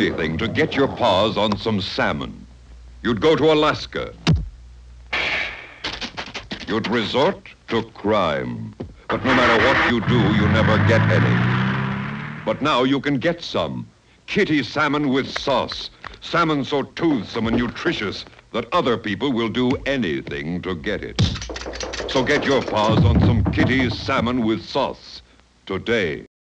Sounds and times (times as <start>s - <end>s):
Speech: 0.0s - 4.2s, 6.6s - 11.4s, 12.5s - 21.4s, 22.1s - 26.3s.